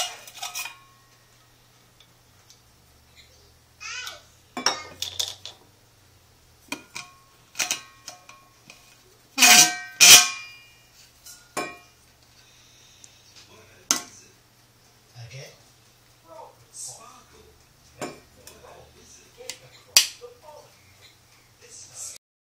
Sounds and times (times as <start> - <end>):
Speech: 21.6 - 22.2.